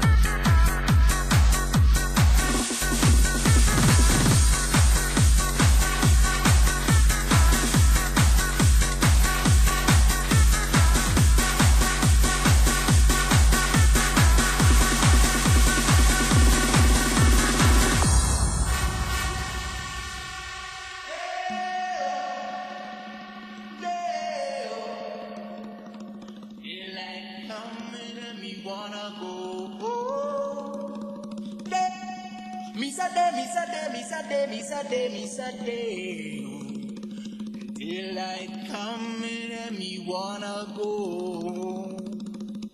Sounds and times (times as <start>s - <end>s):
Music: 0.0s - 42.7s.